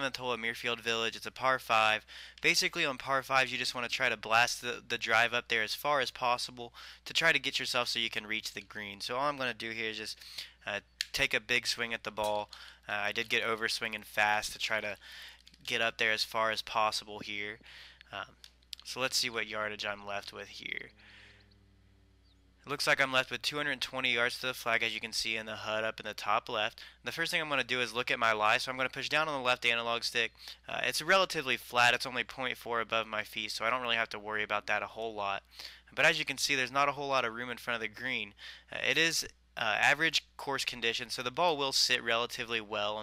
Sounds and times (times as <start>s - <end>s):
Speech: 0.0s - 20.9s, 22.7s - 43.0s.